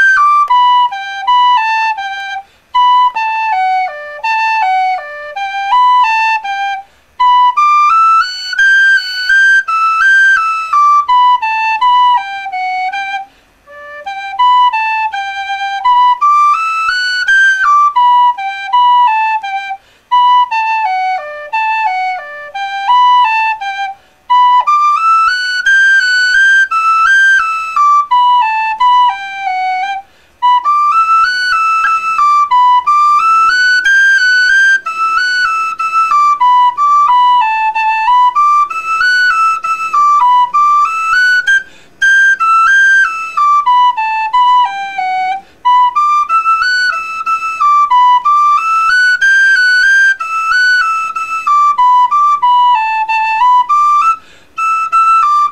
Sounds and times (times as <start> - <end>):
Inside, small room: 0.0 - 55.5.